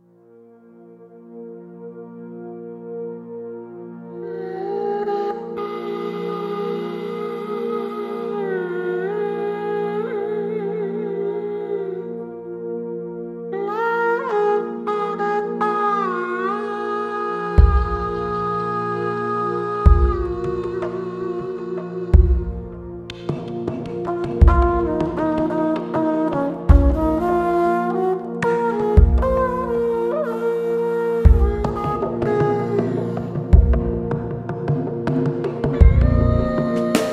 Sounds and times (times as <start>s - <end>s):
Music: 0.0s - 37.1s.